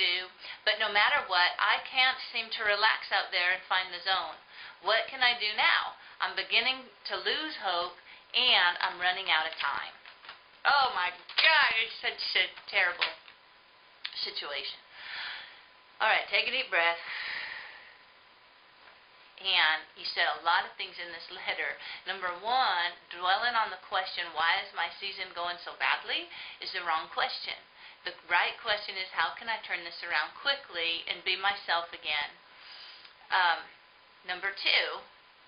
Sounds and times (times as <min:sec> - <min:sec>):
Speech: 0:00.0 - 0:10.0, 0:10.7 - 0:13.2, 0:14.1 - 0:14.8, 0:16.0 - 0:17.0, 0:19.4 - 0:32.4, 0:33.3 - 0:35.1.